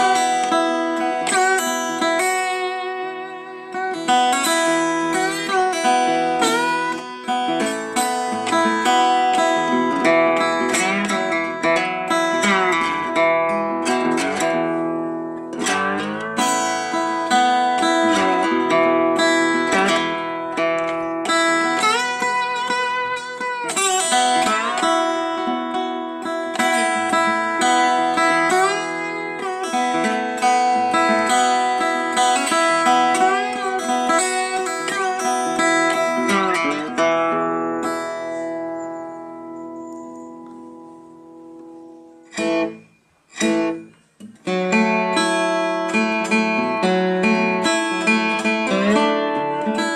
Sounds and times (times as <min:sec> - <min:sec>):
Steel guitar, slide guitar: 0:00.0 - 0:42.8, 0:44.5 - 0:49.9.